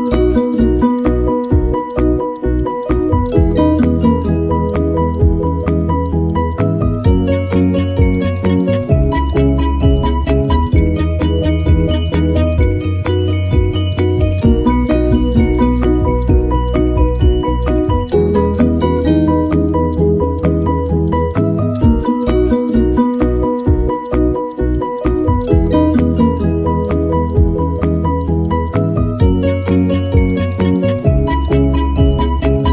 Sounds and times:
Music: 0.0 - 32.7.

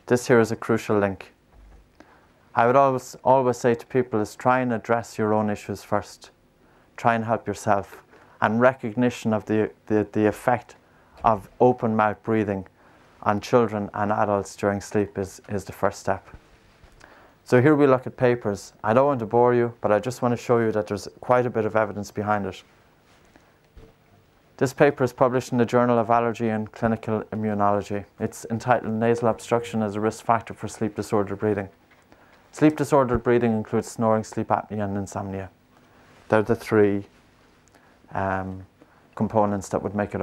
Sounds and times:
Speech: 0.0 - 1.4, 2.6 - 6.4, 7.0 - 16.4, 17.4 - 22.7, 24.6 - 31.8, 32.5 - 35.6, 36.3 - 37.2, 38.1 - 40.2.

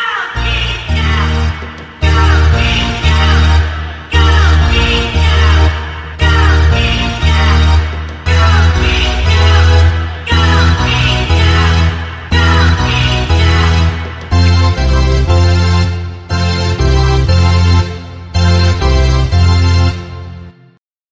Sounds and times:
Music: 0.0 - 20.8.

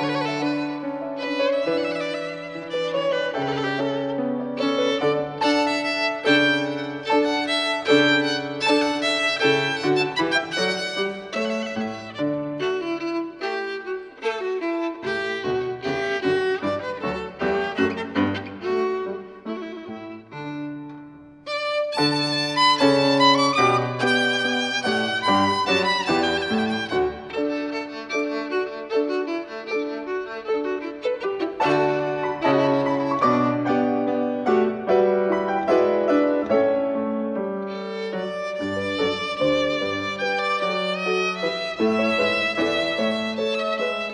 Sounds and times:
Violin, fiddle: 0.0 - 44.1.

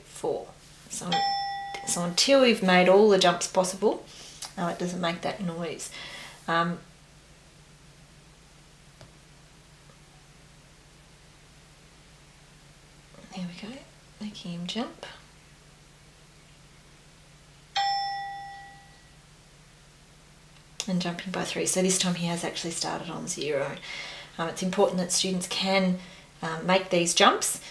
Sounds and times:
Speech: 0.0 - 1.2, 1.8 - 5.9, 6.5 - 6.9, 13.2 - 15.2, 20.8 - 23.8, 24.4 - 27.7
Inside, small room: 0.0 - 27.7.

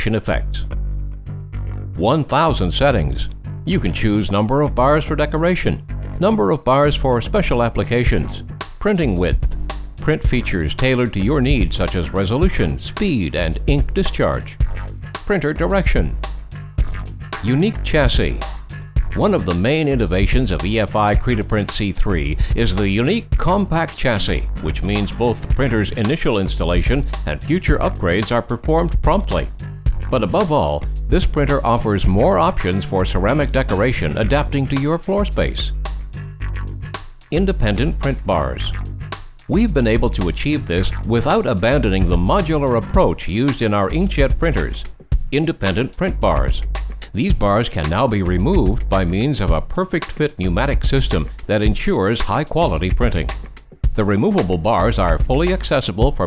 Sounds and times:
Speech: 0.0 - 0.7, 2.0 - 14.6, 15.2 - 16.2, 17.4 - 18.5, 19.2 - 29.5, 30.1 - 35.7, 37.3 - 38.8, 39.5 - 53.4, 54.0 - 56.2
Music: 0.0 - 56.2.

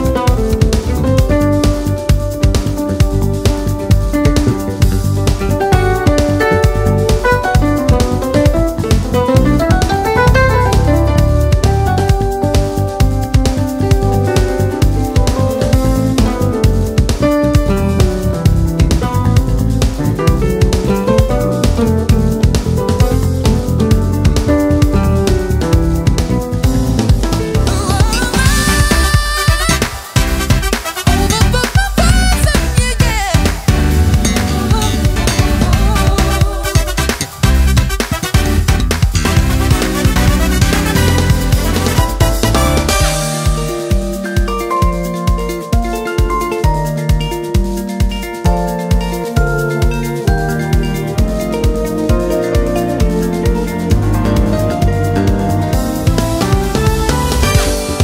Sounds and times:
Music: 0.0 - 58.0.

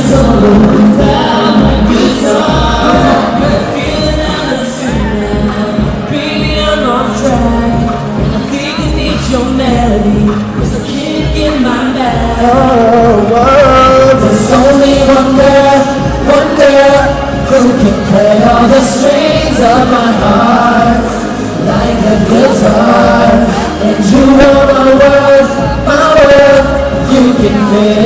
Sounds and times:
Musical instrument: 0.0 - 28.0.

